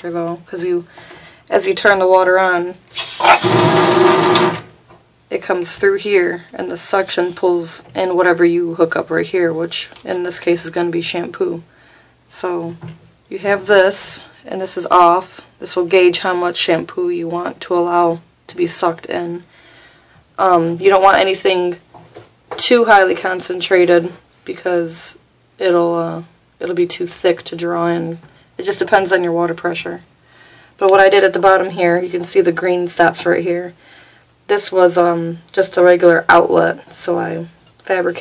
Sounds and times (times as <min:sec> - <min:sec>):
Speech: 0:00.0 - 0:00.9, 0:01.5 - 0:02.8, 0:05.3 - 0:11.7, 0:12.3 - 0:19.5, 0:20.4 - 0:21.9, 0:22.6 - 0:30.1, 0:30.8 - 0:33.8, 0:34.5 - 0:38.2.